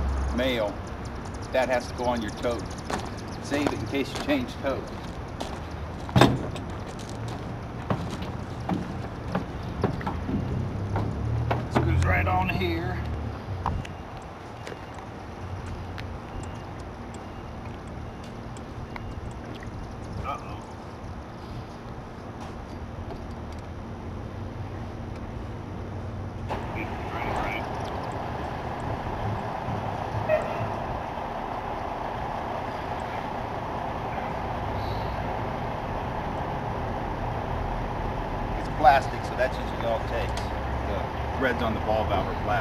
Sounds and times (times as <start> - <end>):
Truck: 0.0 - 42.6.